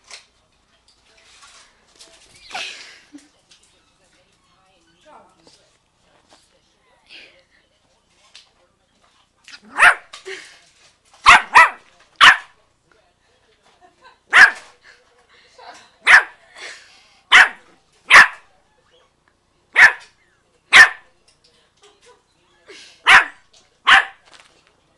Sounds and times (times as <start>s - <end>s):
Bark: 9.7s - 10.1s, 11.2s - 12.6s, 14.3s - 14.7s, 16.0s - 16.4s, 17.3s - 18.5s, 19.8s - 21.1s, 23.1s - 24.2s.